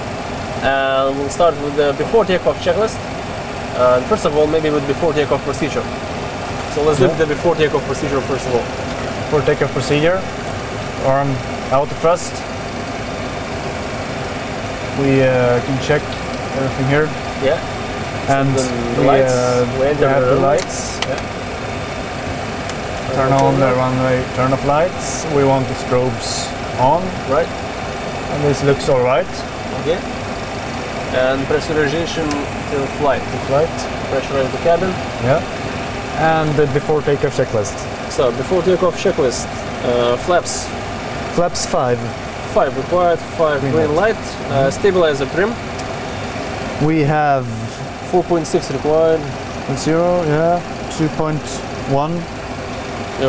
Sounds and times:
Heavy engine (low frequency): 0:00.0 - 0:53.2
Speech: 0:00.6 - 0:03.0, 0:03.8 - 0:05.9, 0:06.7 - 0:08.7, 0:09.3 - 0:10.3, 0:11.0 - 0:12.5, 0:15.0 - 0:17.6, 0:18.3 - 0:21.2, 0:23.1 - 0:27.5, 0:28.3 - 0:30.0, 0:31.1 - 0:35.5, 0:36.2 - 0:40.7, 0:41.3 - 0:45.6, 0:46.8 - 0:52.3.

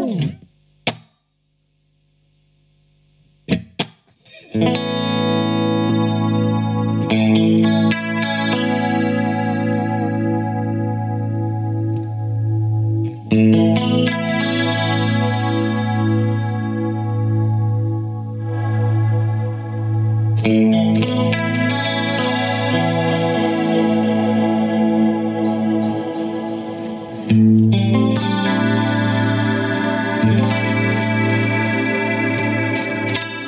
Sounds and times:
Guitar: 0:00.0 - 0:01.2, 0:03.4 - 0:33.4
Effects unit: 0:00.0 - 0:33.4.

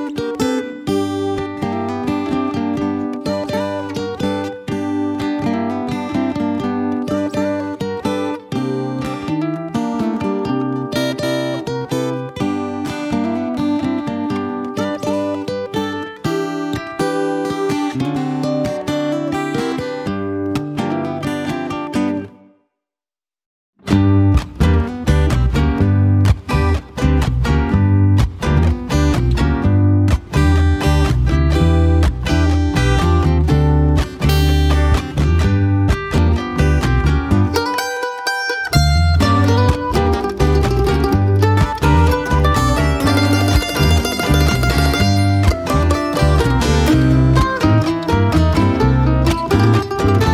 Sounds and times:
Music: 0:00.0 - 0:22.9, 0:23.8 - 0:50.3.

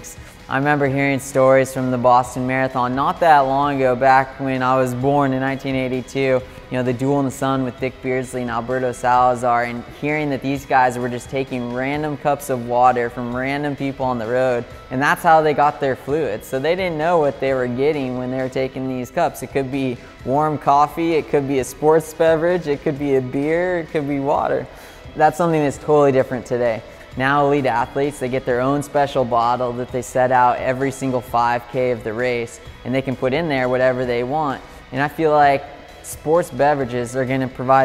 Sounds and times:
Music: 0:00.0 - 0:37.8
Speech: 0:00.0 - 0:37.8.

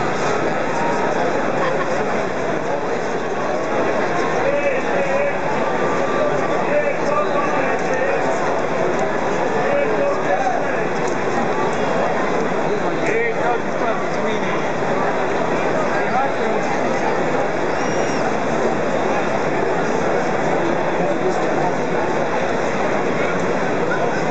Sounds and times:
Speech: 0:00.0 - 0:24.3.

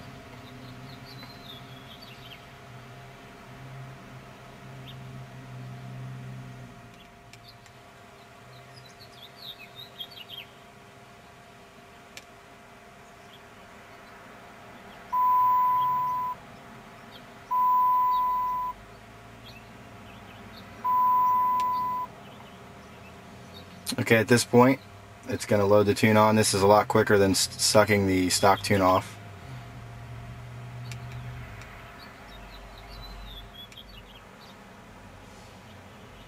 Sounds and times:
Car: 0:00.0 - 0:10.4, 0:14.0 - 0:36.2.

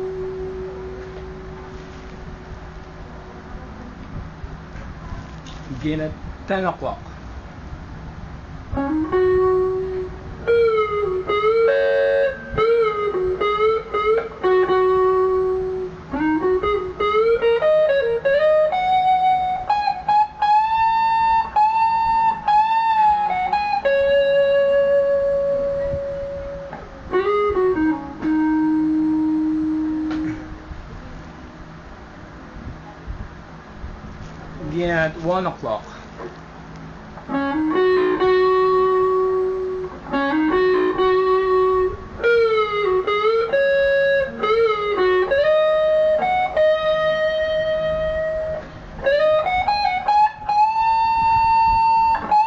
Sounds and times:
Music: 0:00.0 - 0:02.5, 0:08.7 - 0:30.7, 0:37.2 - 0:52.4.

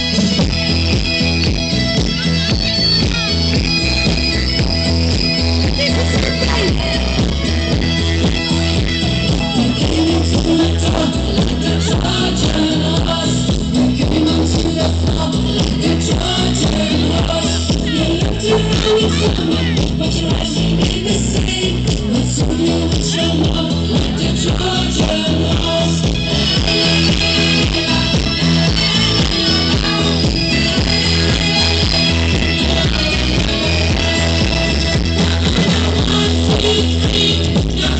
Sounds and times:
Music: 0:00.0 - 0:37.9.

